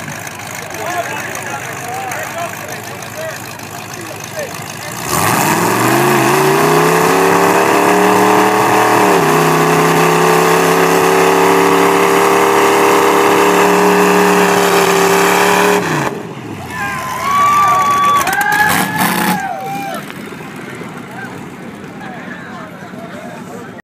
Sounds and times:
Truck: 0.0s - 23.8s
Speech: 0.2s - 5.1s, 21.1s - 23.8s.

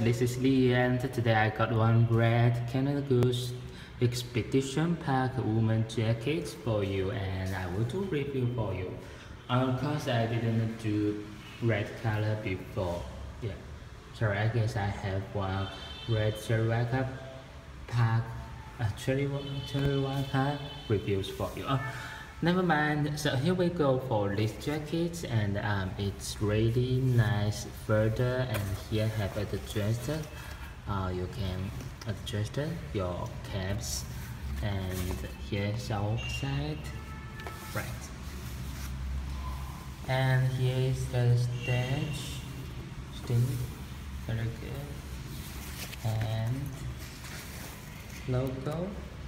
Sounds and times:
Speech: 0.0s - 37.0s, 37.6s - 38.2s, 40.0s - 45.1s, 45.9s - 47.0s, 48.2s - 49.2s.

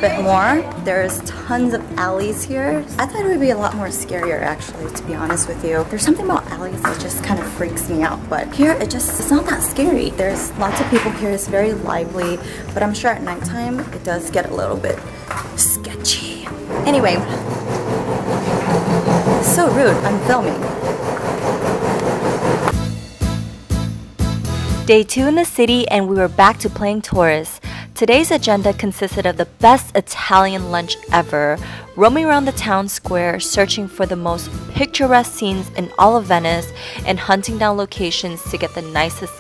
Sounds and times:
Speech: 0.0s - 15.0s, 19.4s - 20.7s, 24.9s - 39.4s
Music: 0.0s - 39.4s.

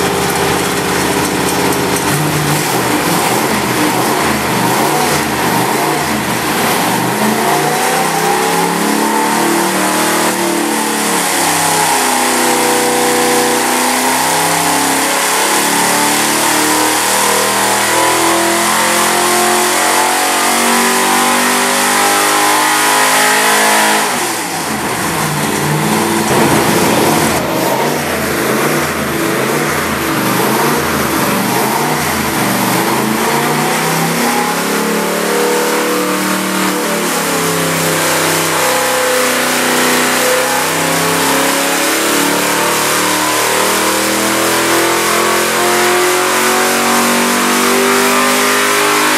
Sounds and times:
Engine: 0.0s - 49.1s.

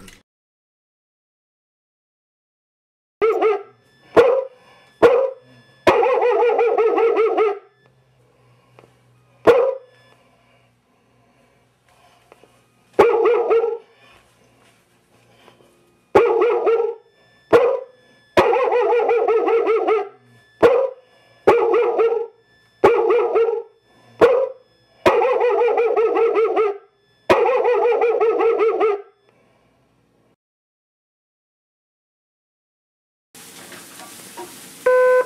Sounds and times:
Bow-wow: 3.2s - 7.7s, 9.4s - 9.9s, 13.0s - 13.9s, 16.2s - 29.2s
Bark: 3.2s - 7.8s, 9.4s - 9.9s, 13.0s - 13.9s, 16.2s - 29.2s
Inside, small room: 3.2s - 30.4s.

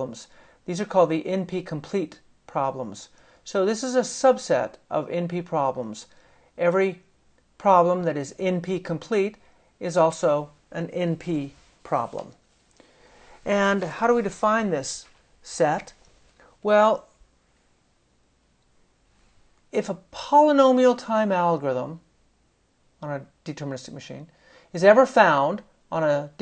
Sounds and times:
Speech: 0.0s - 12.4s, 13.4s - 16.0s, 16.6s - 17.2s, 19.7s - 22.1s, 23.0s - 26.4s.

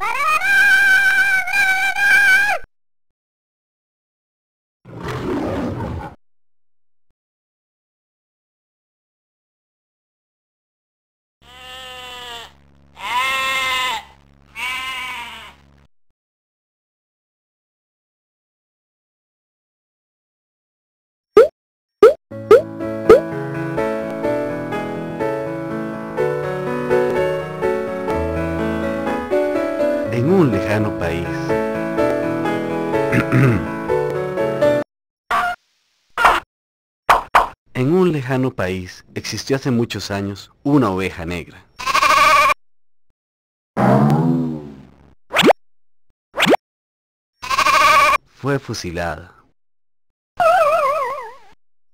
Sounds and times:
Sheep: 11.4s - 15.6s, 41.8s - 42.6s, 47.4s - 48.2s
Music: 22.3s - 34.8s.

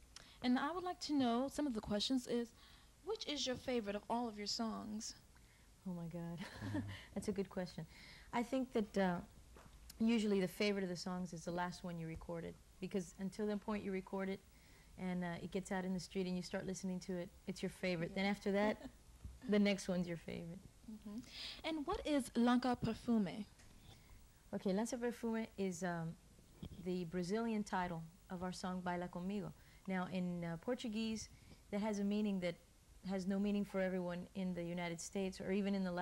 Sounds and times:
Speech: 0.4s - 2.5s, 3.1s - 5.2s, 5.8s - 6.5s, 7.2s - 9.3s, 9.9s - 14.4s, 15.0s - 18.9s, 19.5s - 23.5s, 24.5s - 36.0s.

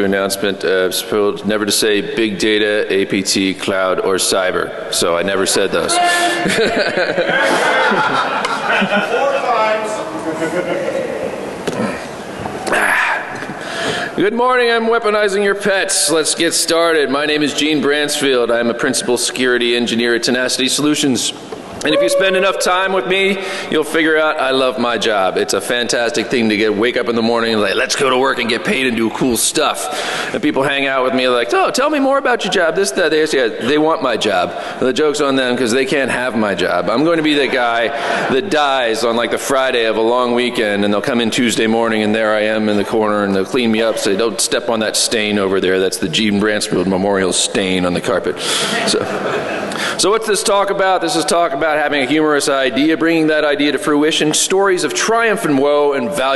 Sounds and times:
Speech: 0.0s - 6.5s, 8.7s - 11.3s, 14.2s - 49.3s, 50.0s - 56.3s.

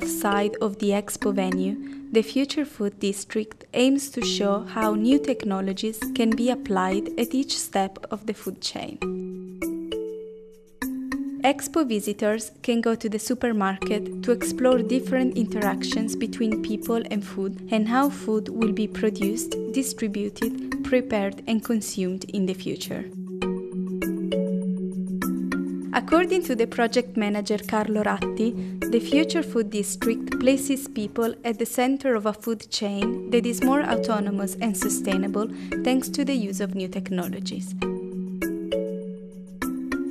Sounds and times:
Speech: 0.0s - 9.0s, 11.5s - 23.1s, 26.0s - 37.7s
Music: 0.0s - 40.1s.

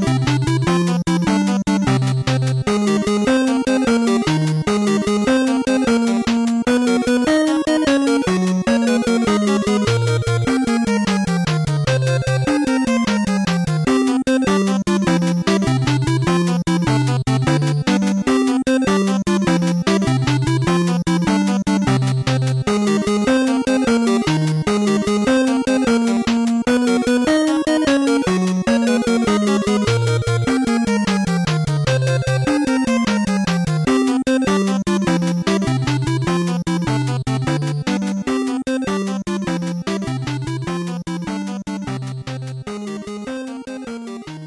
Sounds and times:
Music: 0.0s - 44.4s.

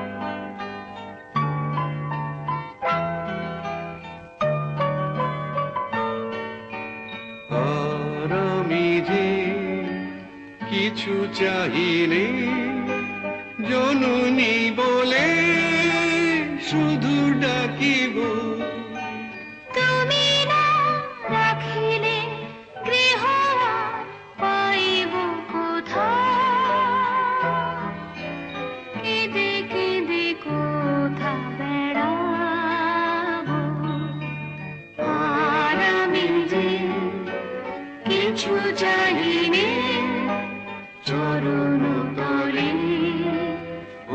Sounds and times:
Music: 0.0s - 44.1s.

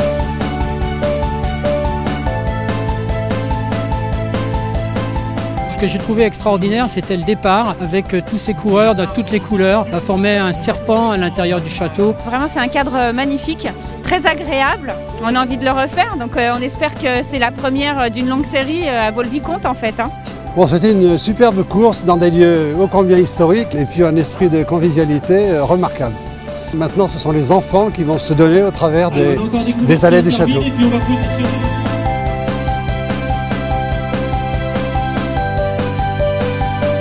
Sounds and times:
Music: 0.0s - 37.0s.

